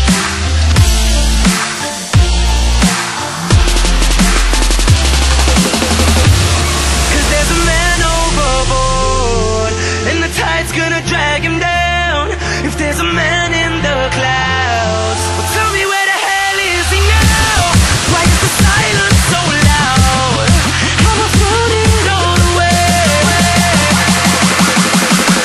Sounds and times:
Dubstep: 0:00.0 - 0:25.4.

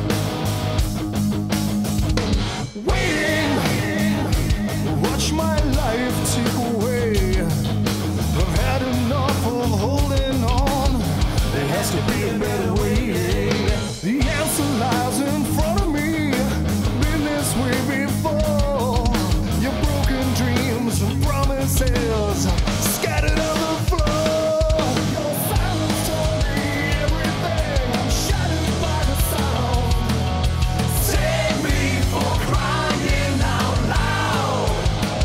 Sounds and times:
Music: 0:00.0 - 0:35.2.

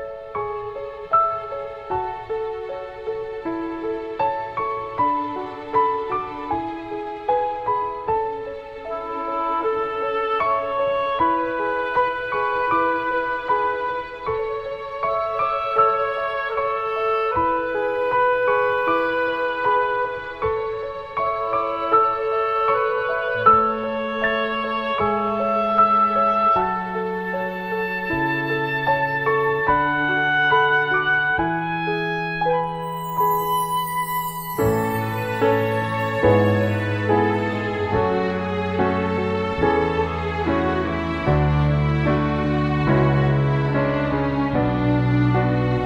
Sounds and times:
Tender music: 0:00.0 - 0:45.8
Soundtrack music: 0:32.6 - 0:45.8.

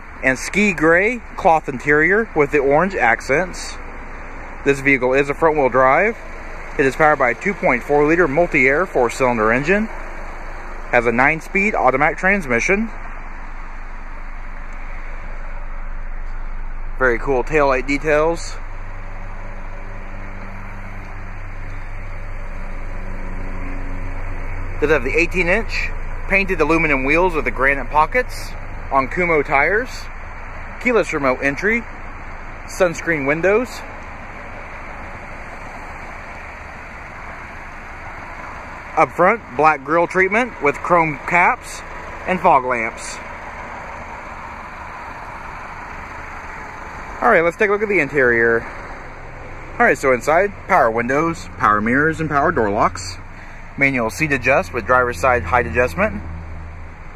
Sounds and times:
Car: 0:00.0 - 0:57.1
Speech: 0:00.2 - 0:03.8, 0:04.6 - 0:06.2, 0:06.8 - 0:10.0, 0:10.9 - 0:13.0, 0:17.0 - 0:18.6, 0:24.8 - 0:30.1, 0:30.8 - 0:31.9, 0:32.7 - 0:33.9, 0:39.0 - 0:43.2, 0:47.2 - 0:48.7, 0:49.8 - 0:53.2, 0:53.8 - 0:56.2.

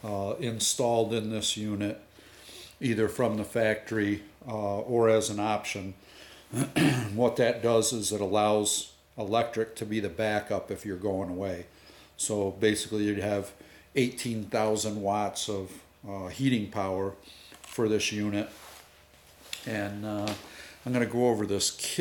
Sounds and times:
Speech: 0:00.0 - 0:02.0, 0:02.8 - 0:06.0, 0:06.6 - 0:18.6, 0:19.6 - 0:22.0.

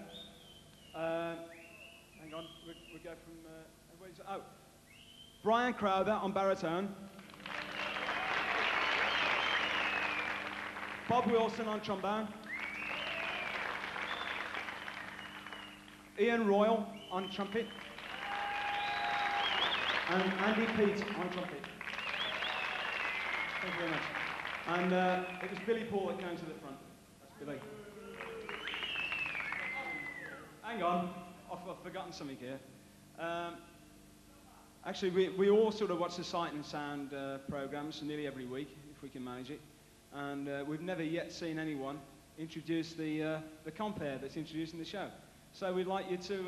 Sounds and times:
Speech: 0:01.0 - 0:01.5, 0:02.2 - 0:04.6, 0:05.4 - 0:07.0, 0:11.1 - 0:12.4, 0:16.2 - 0:17.7, 0:20.1 - 0:21.7, 0:24.7 - 0:28.0, 0:29.6 - 0:33.7, 0:34.3 - 0:46.4.

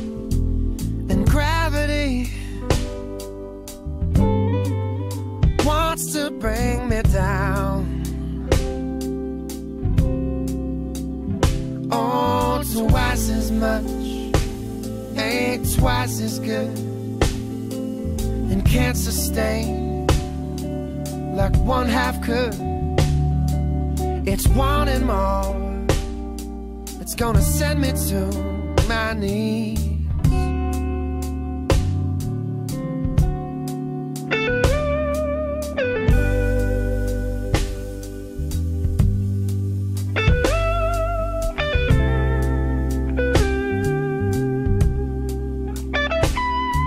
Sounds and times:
Steel guitar, slide guitar: 0:00.0 - 0:46.8.

